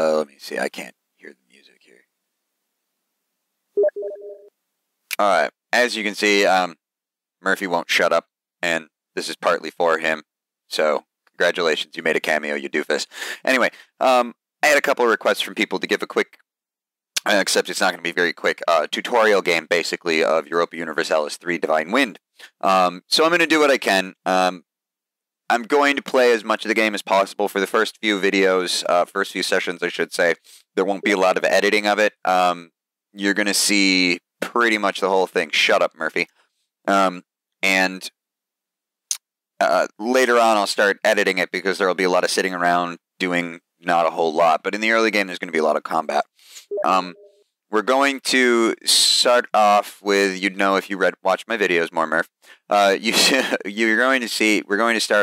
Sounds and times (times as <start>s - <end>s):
Speech: 0.0s - 2.0s, 5.1s - 6.8s, 7.4s - 16.4s, 17.2s - 24.6s, 25.5s - 36.3s, 36.9s - 38.2s, 39.6s - 55.2s.